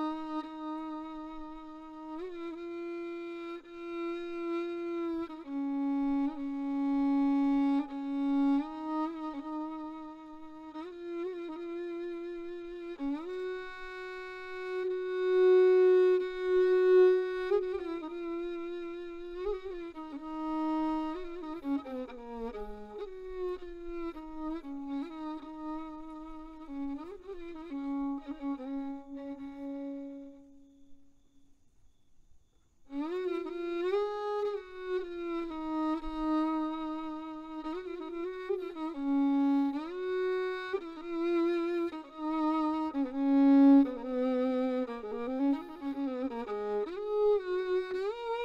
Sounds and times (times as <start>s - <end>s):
Violin, fiddle: 0.0s - 31.4s, 32.7s - 48.4s.